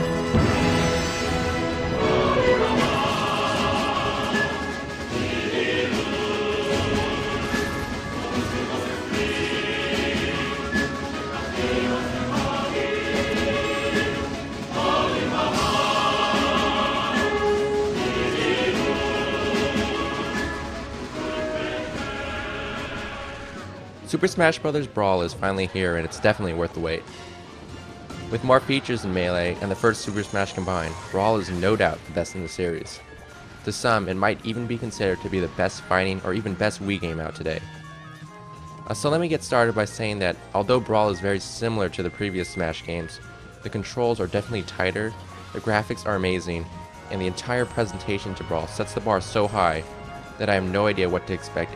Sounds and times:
Music: 0:00.0 - 0:51.7
Speech: 0:24.1 - 0:27.0, 0:28.3 - 0:33.0, 0:33.7 - 0:37.6, 0:38.9 - 0:51.7.

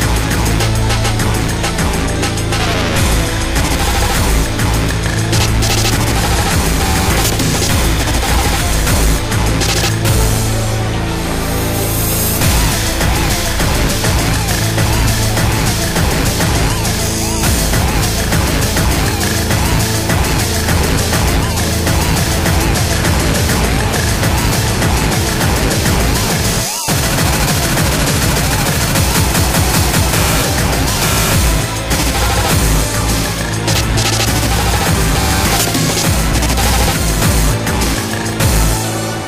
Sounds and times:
Music: 0:00.0 - 0:39.2.

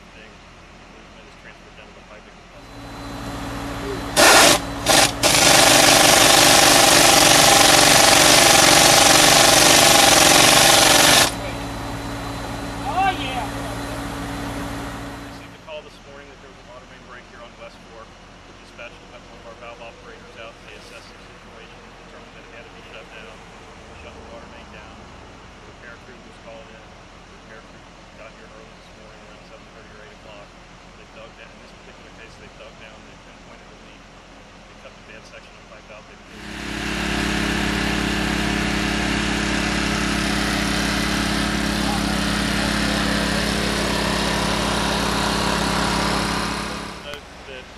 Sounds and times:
Speech: 0:00.0 - 0:02.6, 0:12.8 - 0:13.7, 0:15.4 - 0:23.4, 0:24.0 - 0:25.0, 0:25.7 - 0:34.0, 0:34.7 - 0:36.3, 0:47.0 - 0:47.7.

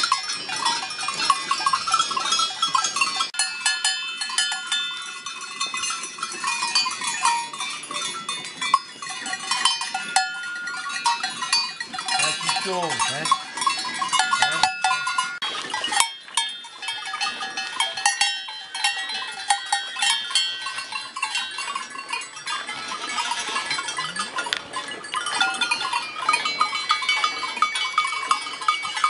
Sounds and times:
Speech: 0:12.2 - 0:13.4, 0:14.4 - 0:14.8.

